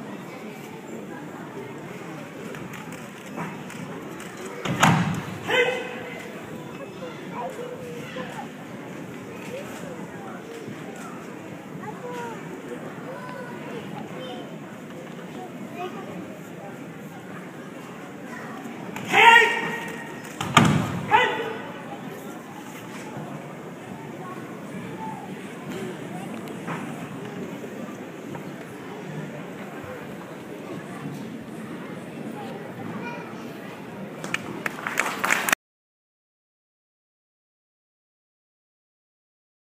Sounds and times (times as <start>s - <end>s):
Speech: 0.0s - 34.6s
Inside, public space: 0.0s - 35.6s.